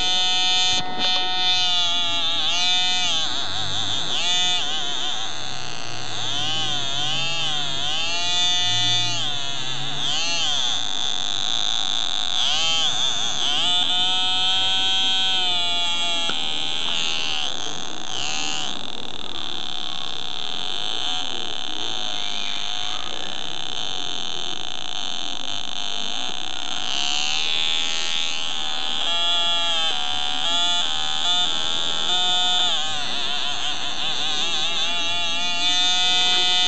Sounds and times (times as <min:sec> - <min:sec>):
Theremin: 0:00.0 - 0:24.0.